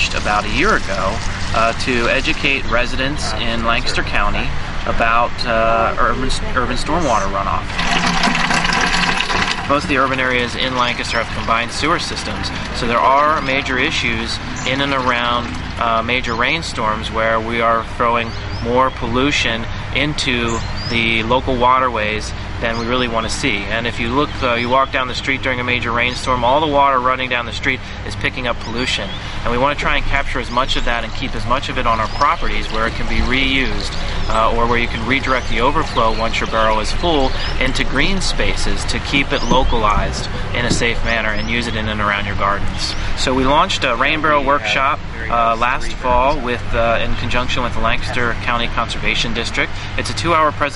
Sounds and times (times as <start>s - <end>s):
Speech: 0.0s - 7.7s, 9.6s - 50.7s.